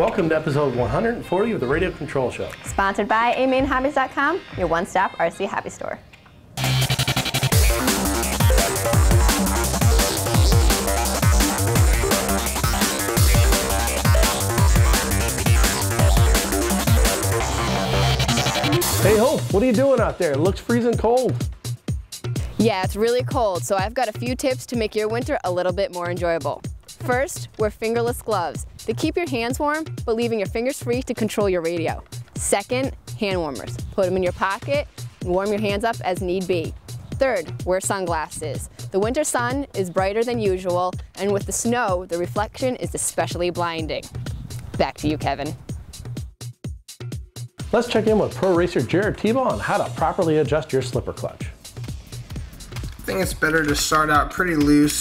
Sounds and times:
Music: 0:00.0 - 0:55.0
Speech: 0:22.6 - 0:44.0, 0:44.8 - 0:45.6, 0:47.8 - 0:51.5, 0:53.1 - 0:55.0.

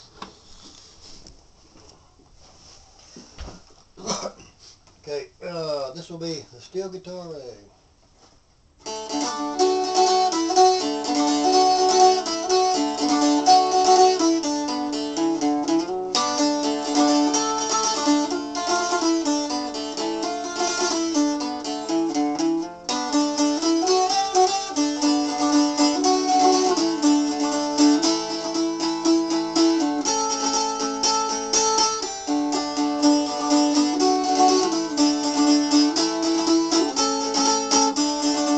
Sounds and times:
Steel guitar, slide guitar: 0:08.8 - 0:38.5.

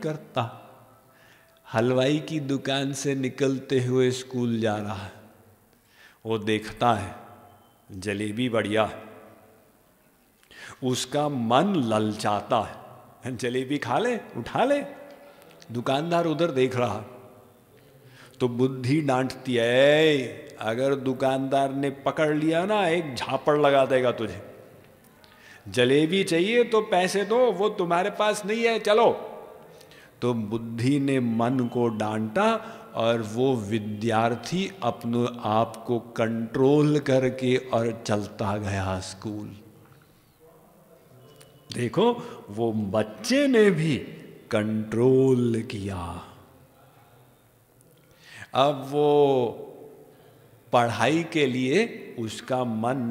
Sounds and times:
Speech: 0:00.0 - 0:00.6, 0:01.7 - 0:05.2, 0:06.2 - 0:07.2, 0:07.9 - 0:09.1, 0:10.8 - 0:15.0, 0:15.7 - 0:17.2, 0:18.4 - 0:24.5, 0:25.7 - 0:29.3, 0:30.2 - 0:39.6, 0:40.4 - 0:47.2, 0:48.5 - 0:49.7, 0:50.7 - 0:53.1.

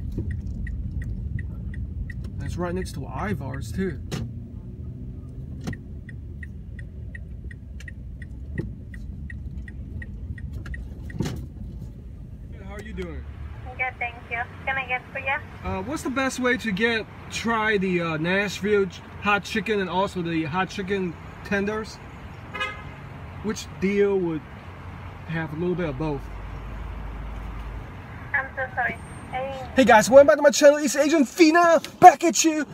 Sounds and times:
Car: 0:00.0 - 0:32.7.

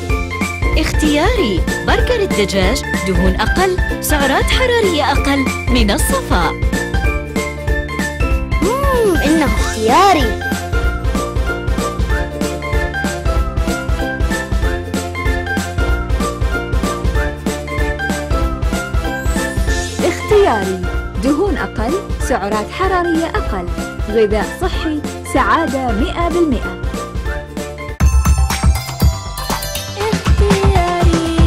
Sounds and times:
Music: 0:00.0 - 0:31.4
Speech: 0:00.8 - 0:06.6, 0:08.6 - 0:10.4, 0:20.0 - 0:26.8.

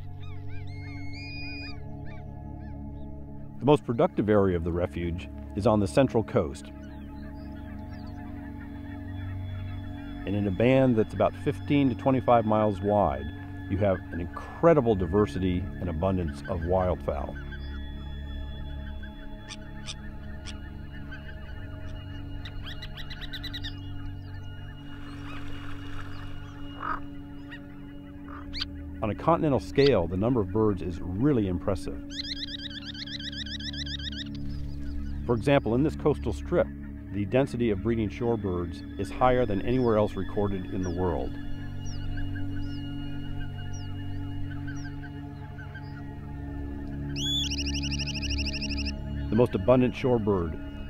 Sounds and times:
Bird: 0:00.0 - 0:50.8
Music: 0:00.0 - 0:50.8
Speech: 0:03.6 - 0:06.7, 0:10.3 - 0:17.4, 0:29.0 - 0:32.0, 0:35.3 - 0:41.3, 0:49.3 - 0:50.6.

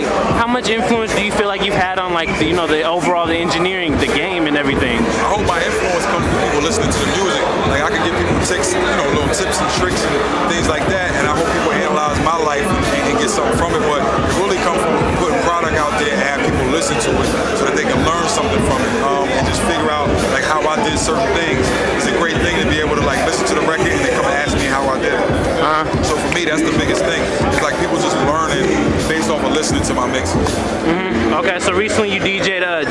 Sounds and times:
Speech: 0:00.0 - 0:32.9.

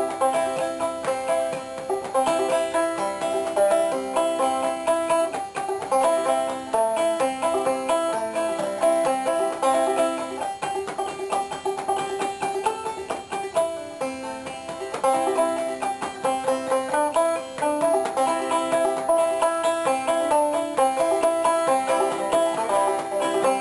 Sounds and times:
Banjo: 0:00.0 - 0:23.6.

